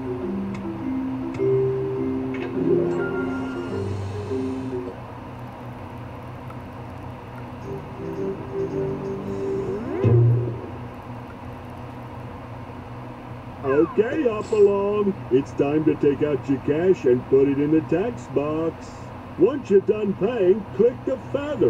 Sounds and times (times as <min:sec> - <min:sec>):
Speech: 0:13.6 - 0:21.6.